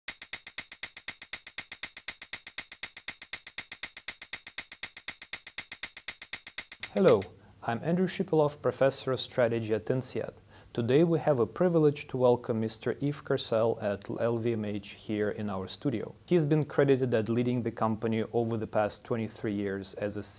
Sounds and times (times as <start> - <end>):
Music: 0.1 - 7.3
Speech: 6.9 - 20.3.